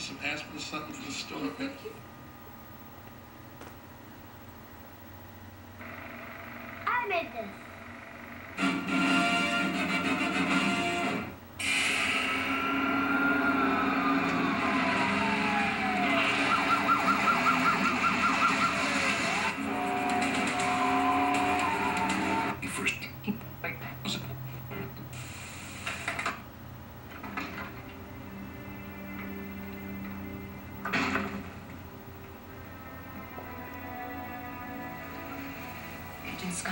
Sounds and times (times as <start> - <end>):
Television: 0.0 - 36.7
Music: 8.6 - 16.0, 16.7 - 22.6, 27.3 - 36.7.